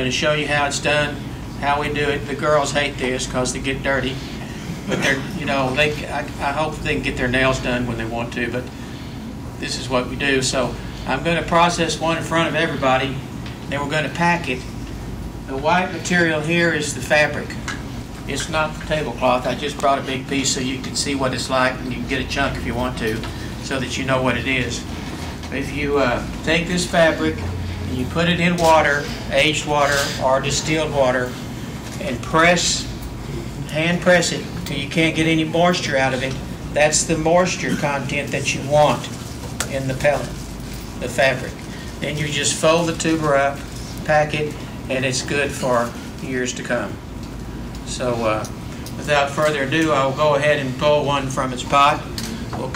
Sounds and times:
Speech: 0:00.0 - 0:04.2, 0:04.8 - 0:08.7, 0:09.6 - 0:14.8, 0:15.5 - 0:31.4, 0:32.0 - 0:40.4, 0:41.0 - 0:47.0, 0:47.8 - 0:52.7.

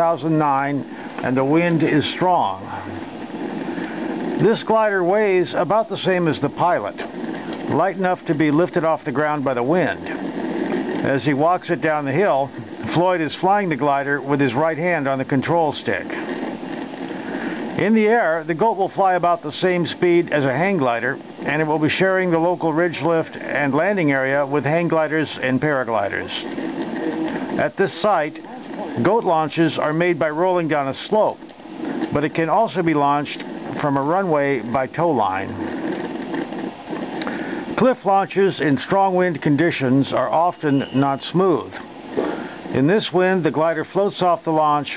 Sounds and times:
Speech: 0:00.0 - 0:03.0, 0:04.4 - 0:07.1, 0:07.7 - 0:10.2, 0:11.0 - 0:16.2, 0:17.8 - 0:26.4, 0:27.0 - 0:31.4, 0:32.1 - 0:35.6, 0:37.8 - 0:41.8, 0:42.7 - 0:44.9.

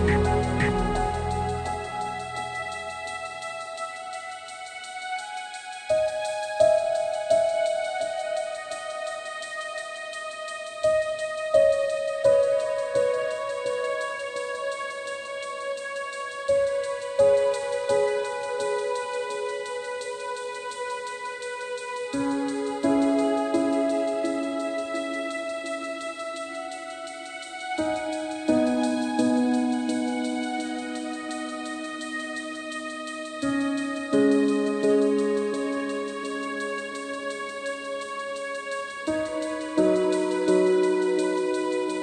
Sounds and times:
New-age music: 0:00.0 - 0:42.0.

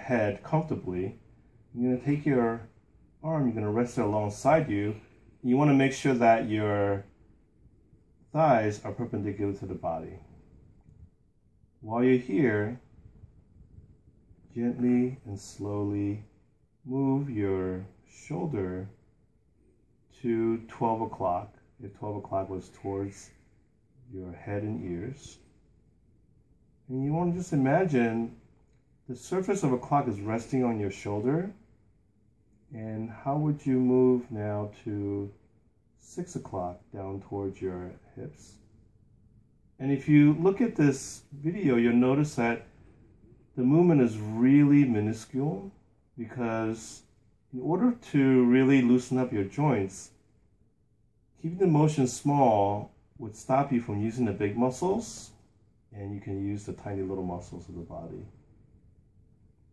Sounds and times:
Speech: 0:00.0 - 0:07.2, 0:08.3 - 0:10.3, 0:11.8 - 0:12.9, 0:14.5 - 0:19.0, 0:20.1 - 0:23.4, 0:24.0 - 0:25.5, 0:26.8 - 0:31.7, 0:32.7 - 0:35.4, 0:36.0 - 0:38.7, 0:39.8 - 0:42.8, 0:43.4 - 0:50.2, 0:51.4 - 0:58.5.

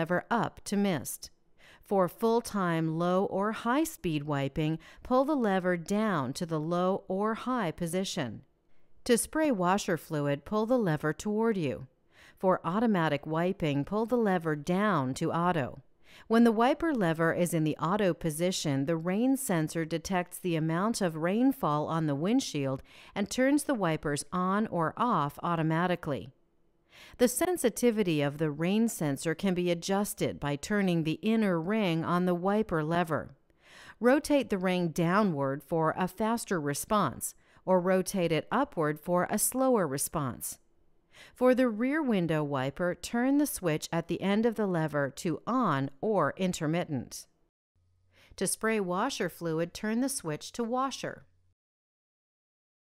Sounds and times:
Speech: 0:00.0 - 0:01.3, 0:01.9 - 0:08.4, 0:09.1 - 0:26.3, 0:27.2 - 0:33.4, 0:34.0 - 0:40.6, 0:41.4 - 0:47.3, 0:48.4 - 0:51.3.

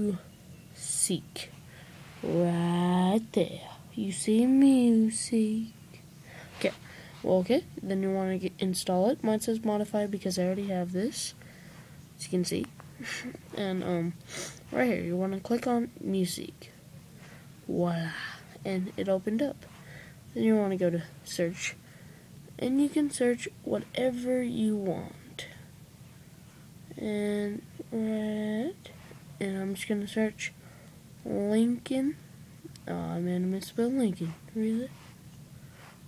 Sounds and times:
Speech: 0:00.0 - 0:01.5, 0:02.2 - 0:05.8, 0:06.6 - 0:11.4, 0:12.2 - 0:16.8, 0:17.7 - 0:19.7, 0:20.4 - 0:21.8, 0:22.6 - 0:25.6, 0:26.9 - 0:30.6, 0:31.2 - 0:35.0.

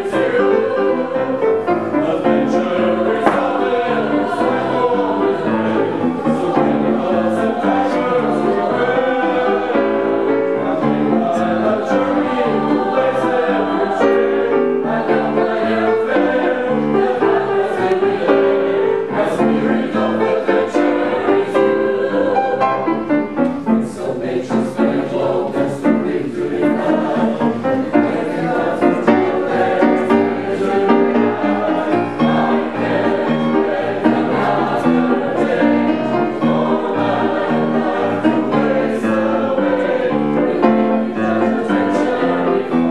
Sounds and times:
Choir: 0:00.0 - 0:42.9
Soul music: 0:00.0 - 0:42.9.

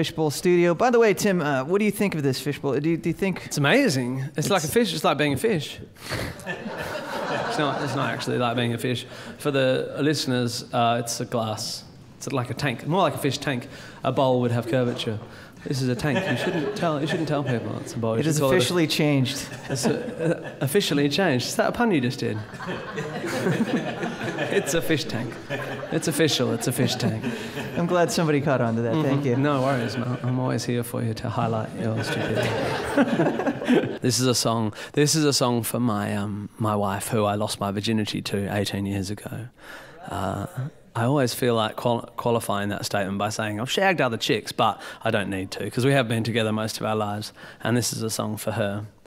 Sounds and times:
Speech: 0:00.0 - 0:05.9, 0:07.4 - 0:22.5, 0:24.5 - 0:32.9, 0:34.0 - 0:49.0.

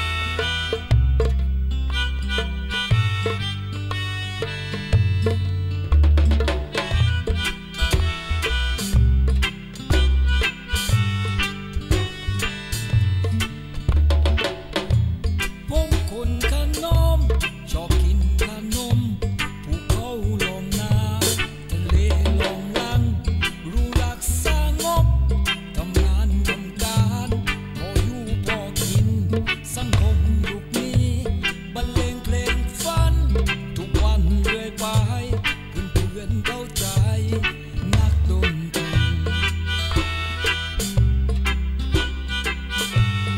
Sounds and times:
Music: 0:00.0 - 0:43.3.

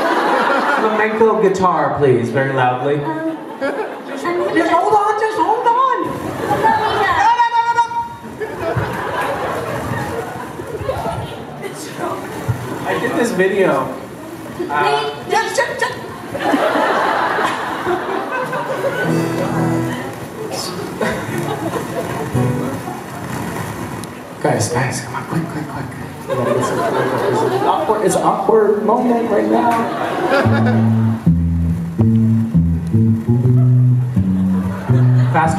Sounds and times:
Acoustic guitar: 0:04.2 - 0:35.5
Electric guitar: 0:18.8 - 0:24.2, 0:30.3 - 0:35.5
Strum: 0:19.0 - 0:21.6, 0:30.4 - 0:35.5.

